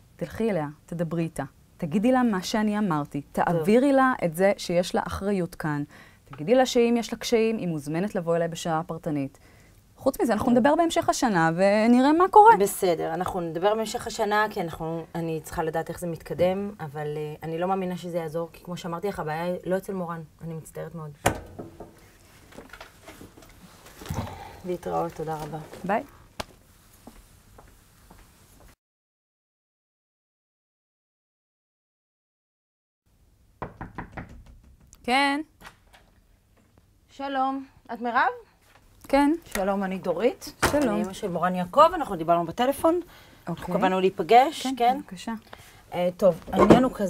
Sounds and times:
Conversation: 0.3 - 22.1, 24.1 - 26.2, 37.1 - 47.0.

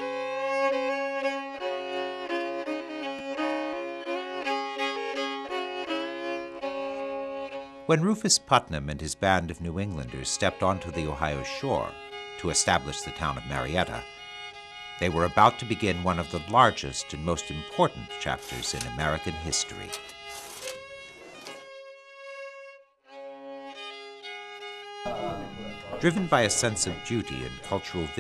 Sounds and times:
Music: 0.0 - 28.2
Speech: 7.9 - 14.0, 15.0 - 20.0, 25.1 - 28.2.

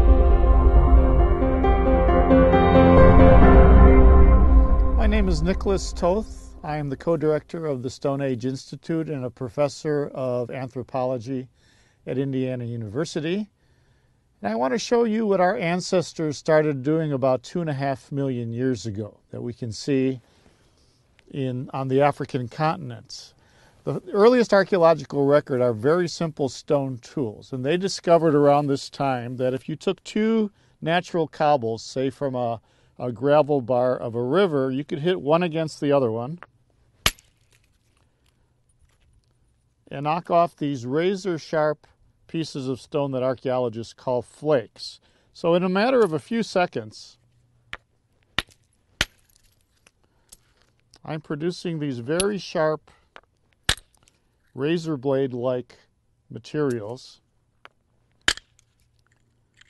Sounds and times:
Speech: 5.0 - 11.5, 12.1 - 13.5, 14.4 - 20.2, 21.3 - 36.4, 39.9 - 47.2, 51.0 - 52.9, 54.6 - 57.2.

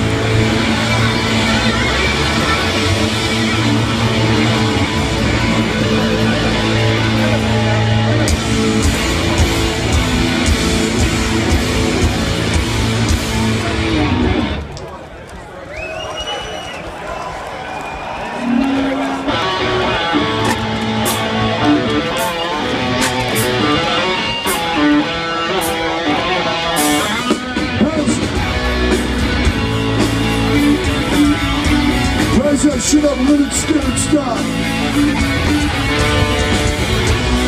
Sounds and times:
Music: 0.0 - 14.6, 18.4 - 37.4.

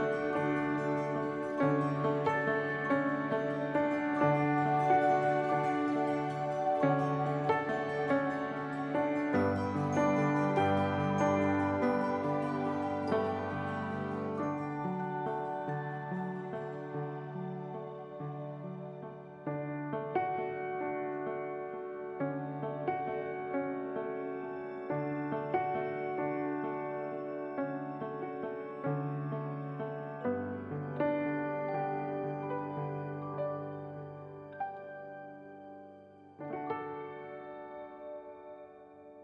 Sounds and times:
Music: 0.0 - 39.2.

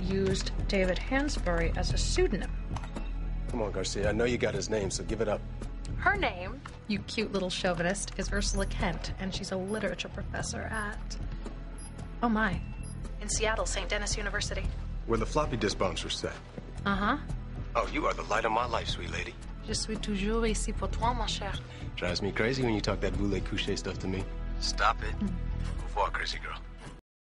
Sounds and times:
Music: 0.0 - 27.0.

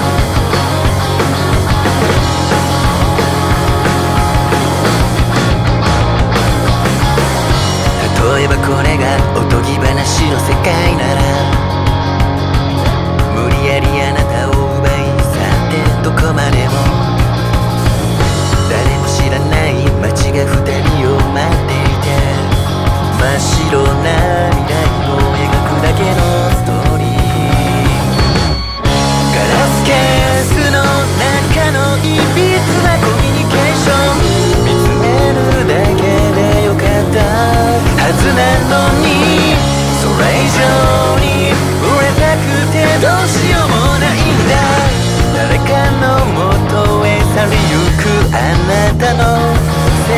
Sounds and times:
Music: 0.0 - 50.1.

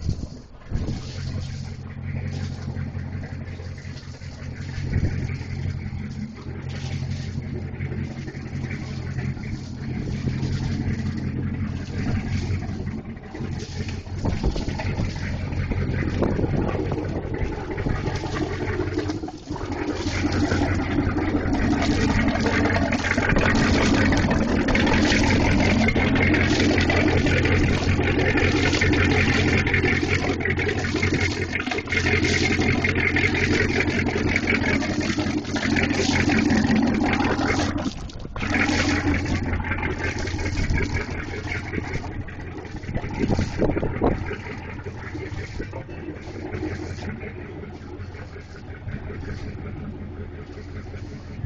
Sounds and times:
Vehicle: 0.0 - 51.4.

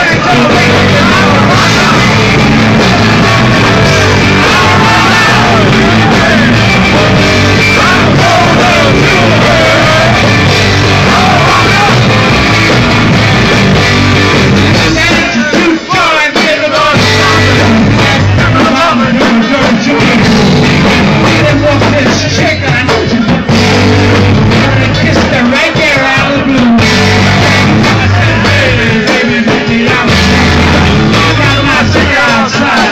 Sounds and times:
Music: 0.0 - 32.9.

